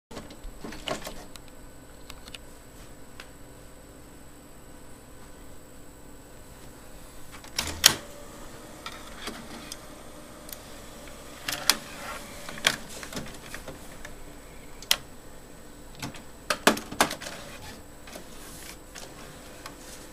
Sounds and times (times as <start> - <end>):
Power windows, electric windows: 7.6 - 13.6.